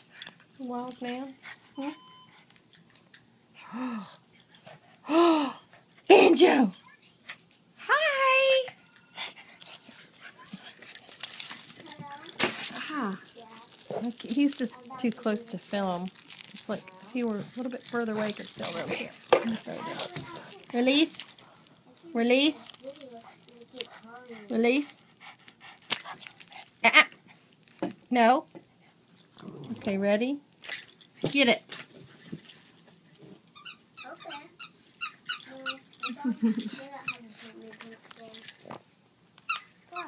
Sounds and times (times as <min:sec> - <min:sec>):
Inside, small room: 0:00.0 - 0:40.0
Child speech, kid speaking: 0:00.6 - 0:02.0, 0:06.7 - 0:08.1, 0:11.7 - 0:15.7, 0:16.7 - 0:18.9, 0:19.6 - 0:20.8, 0:21.9 - 0:24.5, 0:34.0 - 0:34.7, 0:35.4 - 0:38.6
Squeak: 0:33.6 - 0:35.8.